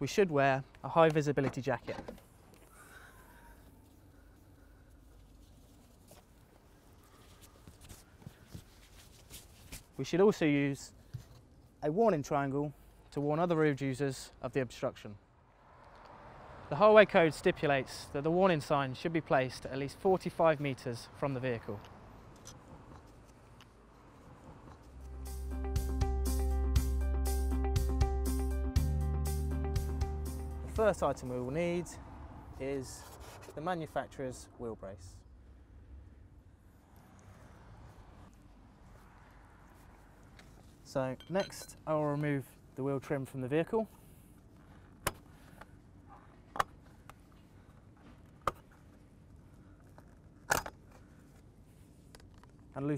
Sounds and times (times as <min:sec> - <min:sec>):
Speech: 0:00.0 - 0:02.1, 0:10.0 - 0:11.0, 0:11.8 - 0:15.2, 0:16.7 - 0:21.9, 0:30.6 - 0:32.0, 0:32.6 - 0:35.2, 0:40.9 - 0:43.9, 0:52.8 - 0:52.9.